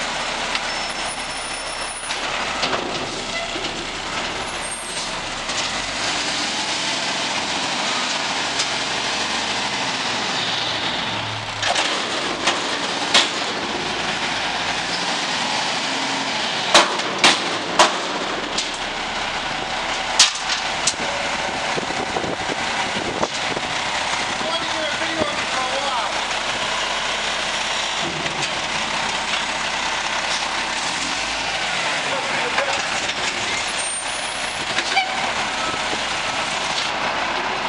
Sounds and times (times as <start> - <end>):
Speech: 24.4 - 26.2, 32.1 - 32.8.